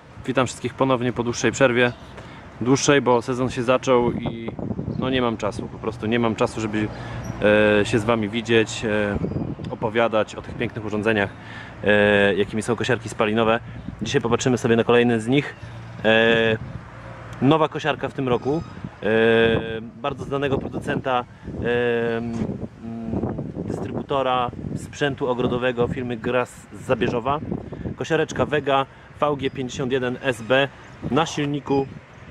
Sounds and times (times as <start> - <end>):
Speech: 0.2 - 16.6, 17.4 - 27.4, 28.0 - 31.9.